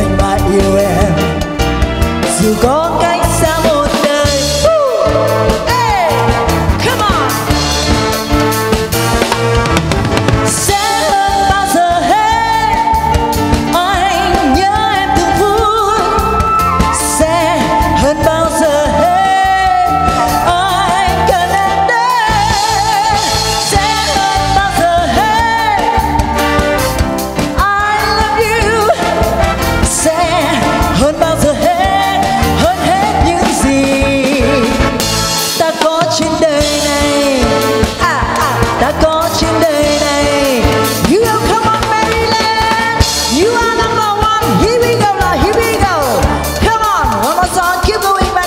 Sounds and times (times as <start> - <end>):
Music: 0.0 - 48.4.